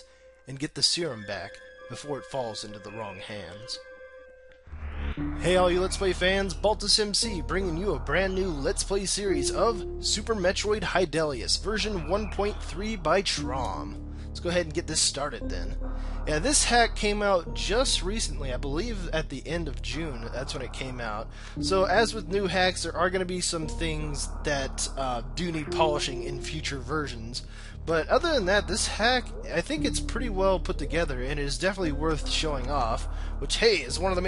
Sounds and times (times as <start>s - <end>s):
Speech: 0.0s - 3.8s, 5.4s - 34.2s.